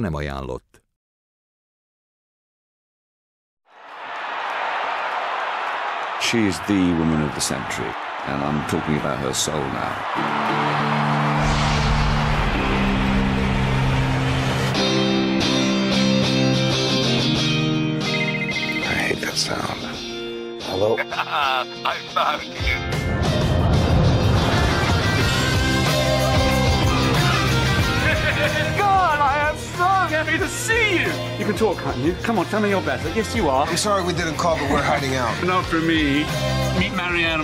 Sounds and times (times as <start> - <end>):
Speech: 0.0 - 0.8, 6.2 - 10.0, 18.8 - 20.0, 28.8 - 37.4
Music: 7.3 - 37.4.